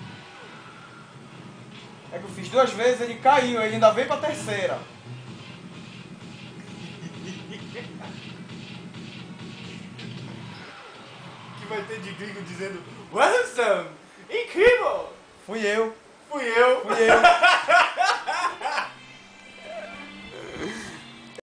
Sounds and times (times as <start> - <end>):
Speech: 2.1 - 4.8, 11.6 - 17.3.